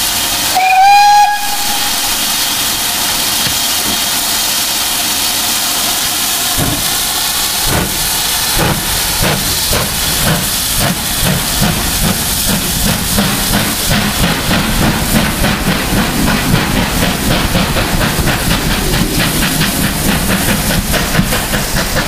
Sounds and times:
Railroad car, train wagon: 0.0s - 22.0s
Steam: 0.0s - 22.0s
Train: 0.0s - 22.0s.

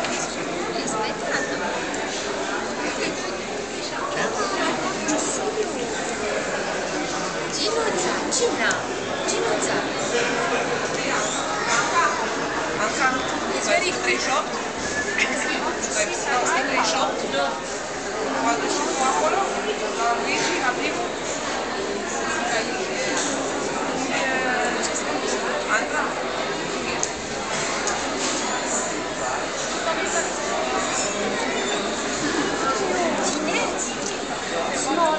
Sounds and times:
Speech: 0.0s - 35.1s.

